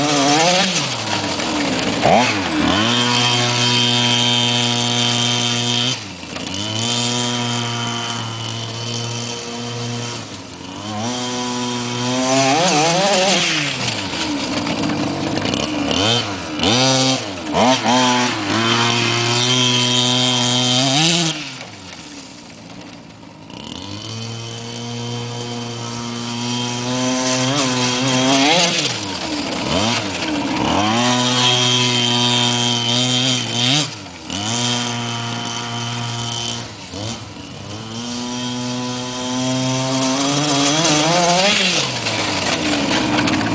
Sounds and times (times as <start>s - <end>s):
Vehicle: 0.0s - 43.5s.